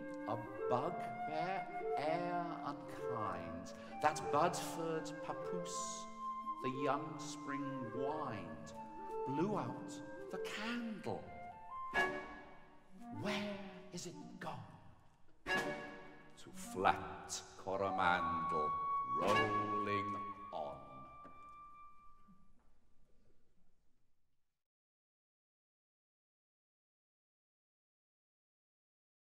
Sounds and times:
Music: 0.0 - 22.8
Speech: 0.3 - 11.3, 13.1 - 14.7, 16.4 - 21.1.

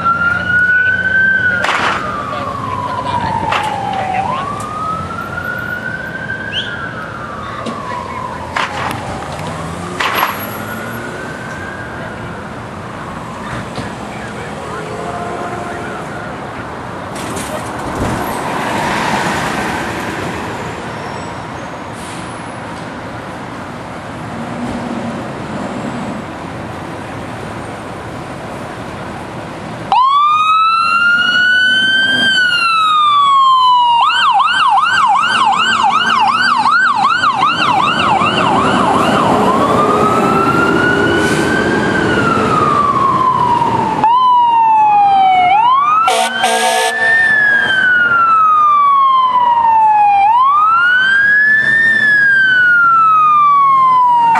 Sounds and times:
Car: 0.0 - 54.3.

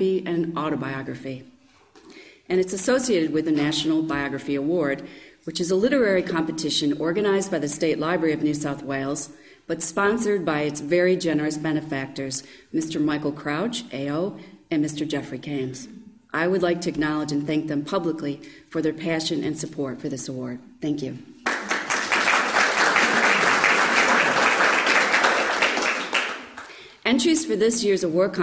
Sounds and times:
Speech: 0.0 - 1.5, 2.5 - 21.3, 27.1 - 28.4.

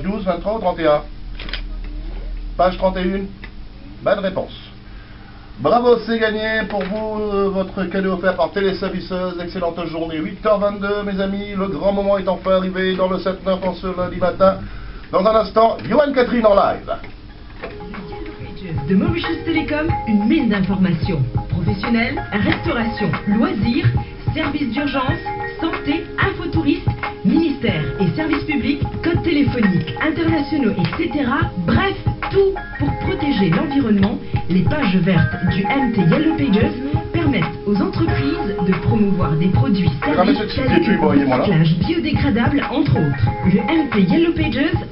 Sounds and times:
Speech: 0.0 - 1.1, 5.6 - 17.1, 24.4 - 44.9
Music: 17.4 - 44.9.

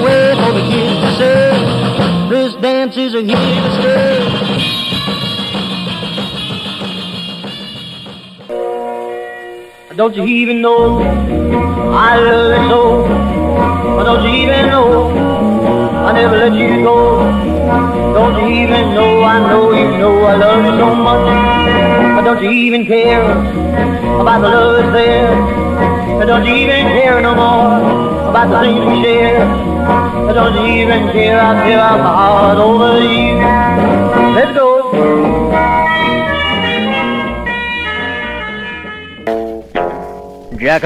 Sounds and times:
Rock and roll: 0.0 - 40.8.

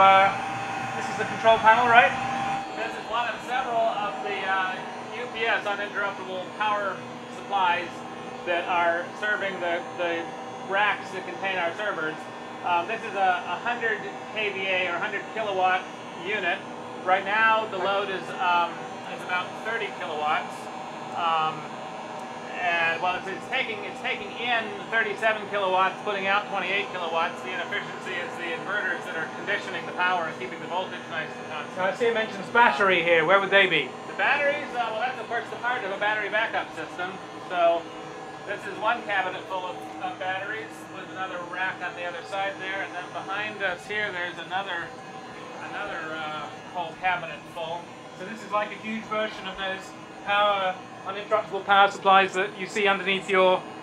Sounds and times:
Speech: 0.0 - 0.4, 1.0 - 2.2, 2.8 - 21.8, 22.5 - 37.9, 38.5 - 44.9, 45.5 - 53.7.

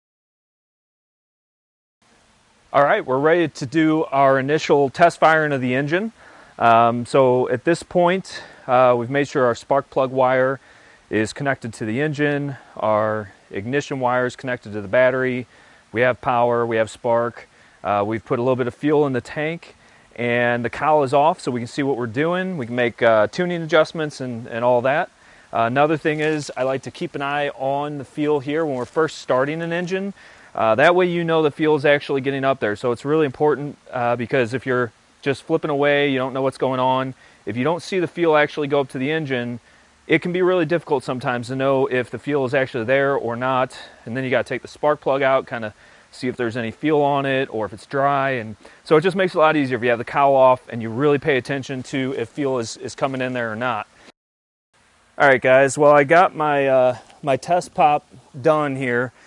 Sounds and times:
Speech: 2.7 - 53.9, 55.2 - 59.1.

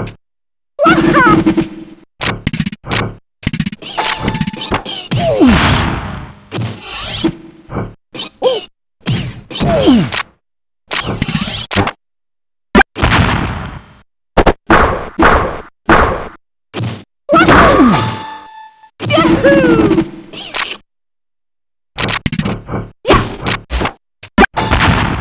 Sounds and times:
Sound effect: 0.8 - 12.0, 12.7 - 20.8, 22.0 - 25.2.

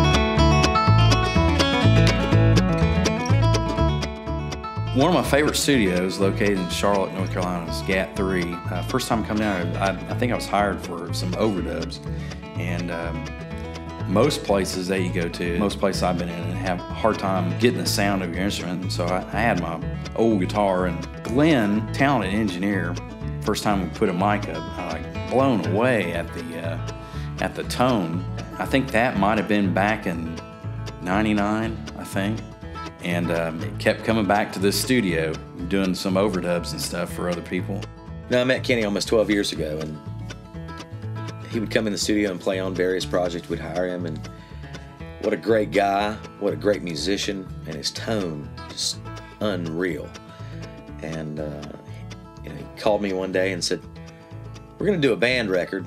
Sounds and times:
Guitar: 0.0 - 55.8
Speech: 4.9 - 12.0, 12.6 - 13.3, 14.0 - 30.4, 31.0 - 40.0, 41.4 - 44.3, 45.2 - 50.2, 51.0 - 53.8, 54.8 - 55.8.

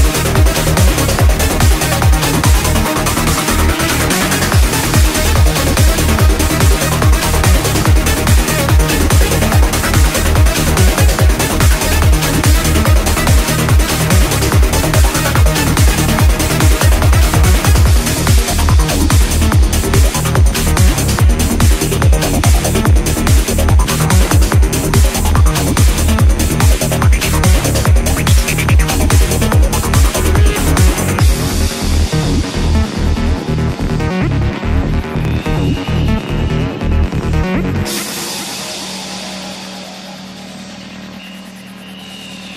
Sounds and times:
Trance music: 0.0 - 42.5.

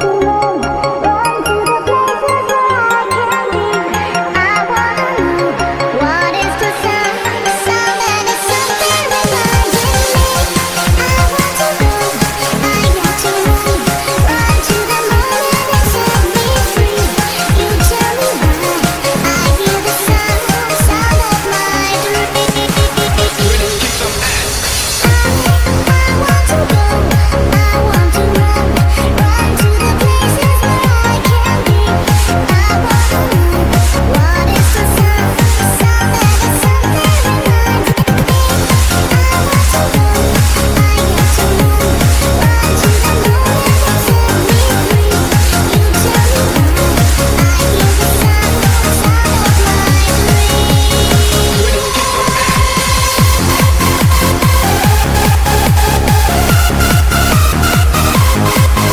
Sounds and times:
Music: 0.0 - 58.9.

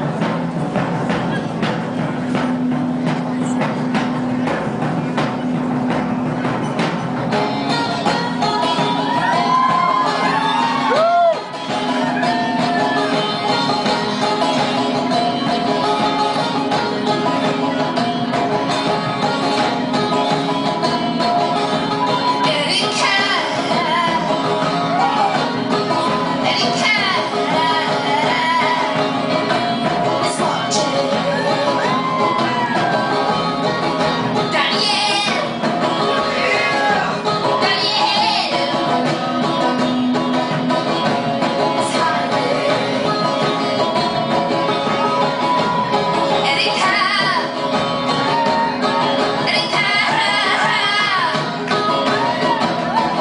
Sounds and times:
Bluegrass: 0.0 - 53.2
Singing: 7.4 - 53.2.

